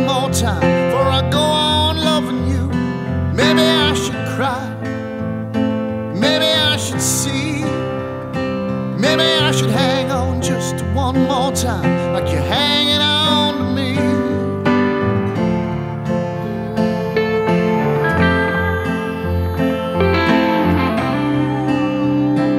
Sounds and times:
Music: 0:00.0 - 0:22.5.

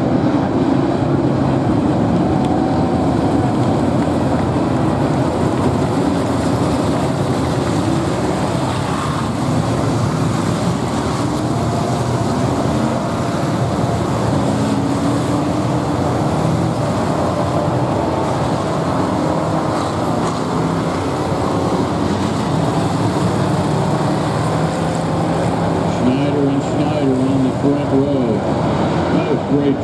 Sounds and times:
Outside, urban or manmade: 0:00.0 - 0:29.8
Race car, auto racing: 0:00.0 - 0:29.8.

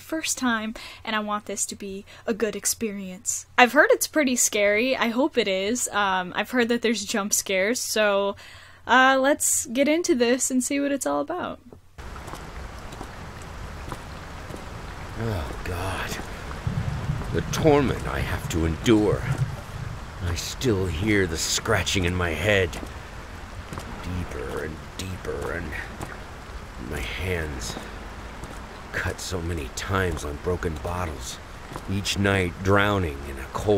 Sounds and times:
Raindrop: 0:12.0 - 0:33.7.

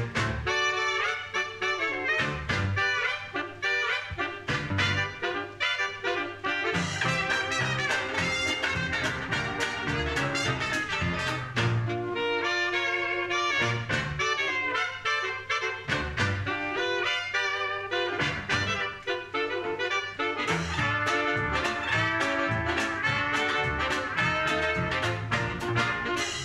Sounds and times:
Saxophone: 0:00.0 - 0:26.4
Trumpet: 0:00.0 - 0:26.4.

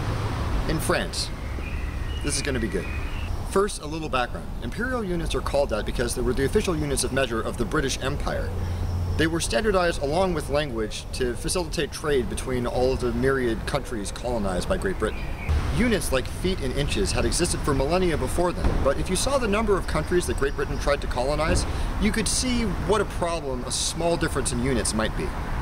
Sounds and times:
Speech: 0:00.7 - 0:01.3, 0:02.2 - 0:02.9, 0:03.5 - 0:08.5, 0:09.2 - 0:15.2, 0:15.8 - 0:25.4.

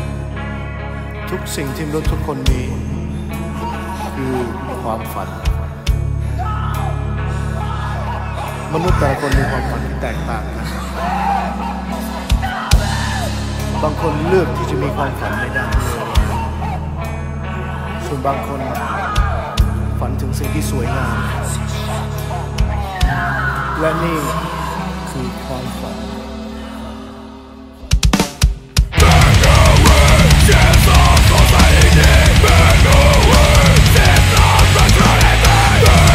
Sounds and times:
Scary music: 0:00.0 - 0:36.1
Speech: 0:08.7 - 0:10.9, 0:13.8 - 0:16.2, 0:18.0 - 0:19.1, 0:20.0 - 0:21.6, 0:23.7 - 0:26.2.

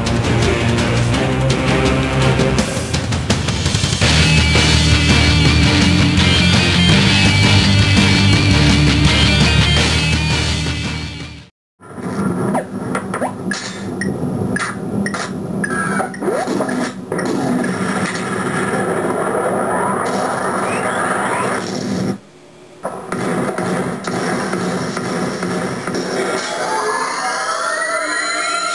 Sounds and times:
Music: 0:00.0 - 0:11.5, 0:24.5 - 0:28.7.

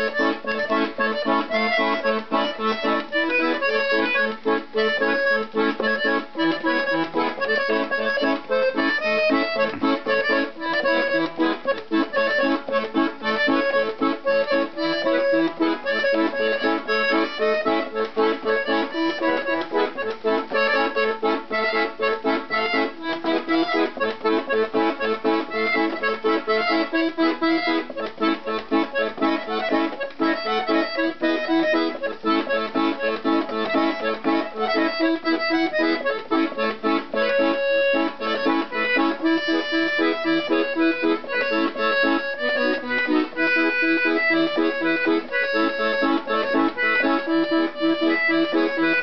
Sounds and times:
Accordion: 0:00.0 - 0:49.0.

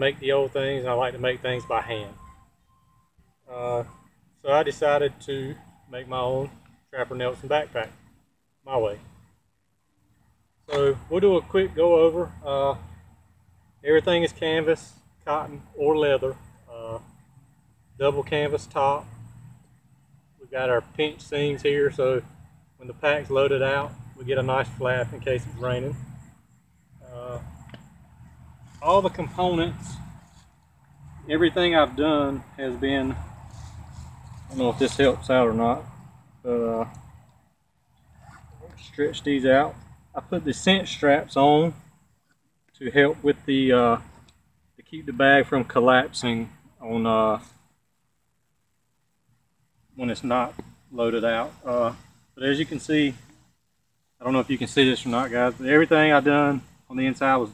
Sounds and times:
Speech: 0:00.0 - 0:02.3, 0:03.5 - 0:08.0, 0:08.6 - 0:09.1, 0:10.7 - 0:12.8, 0:13.8 - 0:17.1, 0:18.0 - 0:19.1, 0:20.4 - 0:26.0, 0:27.0 - 0:27.5, 0:28.8 - 0:30.0, 0:31.3 - 0:33.2, 0:34.5 - 0:36.9, 0:38.6 - 0:41.8, 0:42.7 - 0:44.1, 0:44.8 - 0:47.5, 0:50.0 - 0:53.2, 0:54.2 - 0:57.5
Outside, rural or natural: 0:00.0 - 0:57.5.

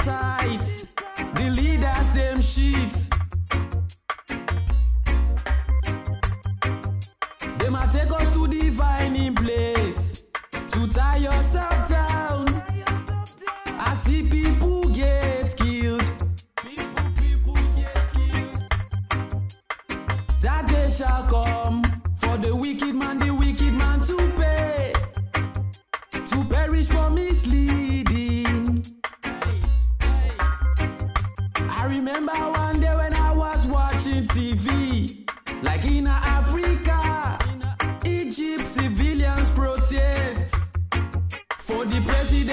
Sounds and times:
Funk: 0:00.0 - 0:42.5.

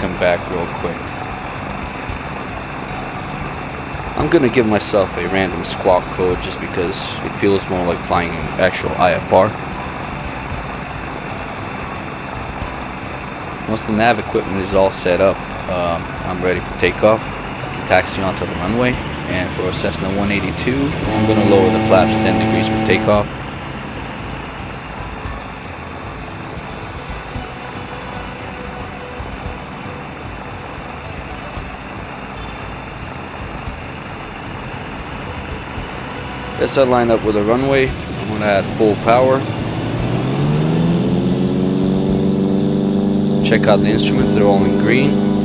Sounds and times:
Vehicle: 0:00.0 - 0:45.4.

